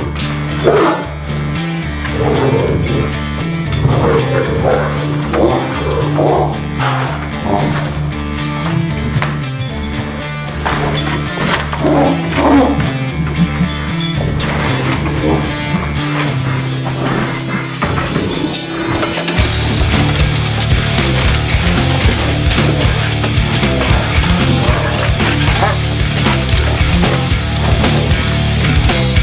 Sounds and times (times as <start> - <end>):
Music: 0.0 - 29.2
Bow-wow: 0.6 - 1.1, 3.8 - 8.0, 10.8 - 13.1, 14.6 - 28.5.